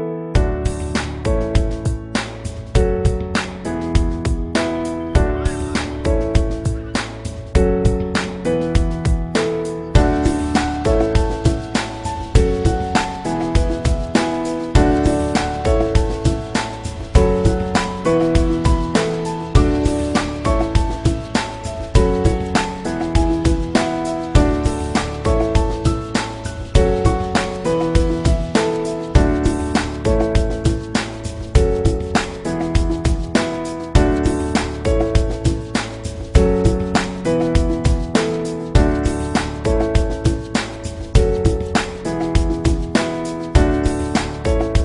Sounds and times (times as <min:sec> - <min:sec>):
Music: 0:00.0 - 0:44.8.